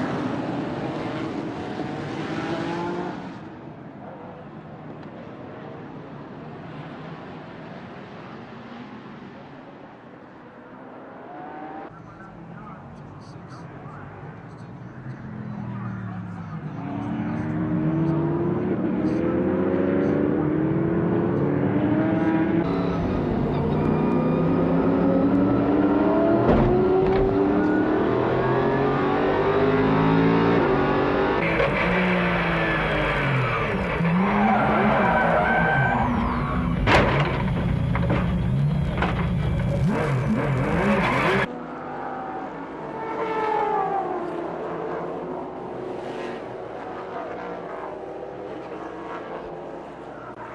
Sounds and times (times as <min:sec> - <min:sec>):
Car: 0:00.0 - 0:50.5.